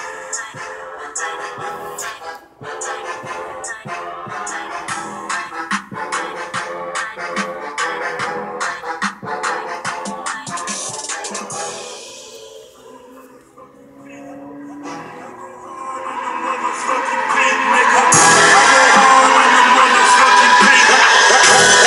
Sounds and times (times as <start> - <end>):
Music: 0.0 - 21.8.